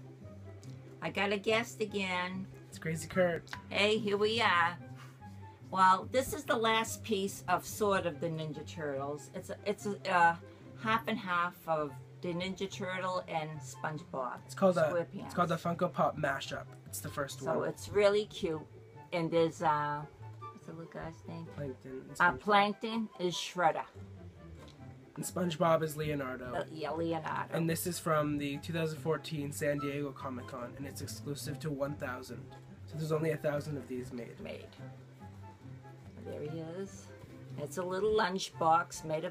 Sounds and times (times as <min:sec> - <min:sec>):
Music: 0:00.0 - 0:39.3.